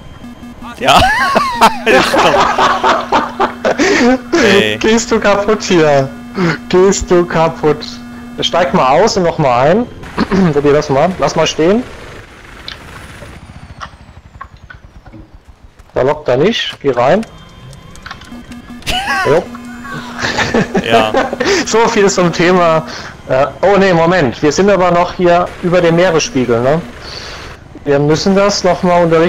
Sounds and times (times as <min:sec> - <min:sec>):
Helicopter: 0:00.0 - 0:29.2
Speech: 0:04.3 - 0:06.1, 0:06.7 - 0:11.8, 0:16.0 - 0:17.3, 0:20.8 - 0:26.8, 0:27.9 - 0:29.2.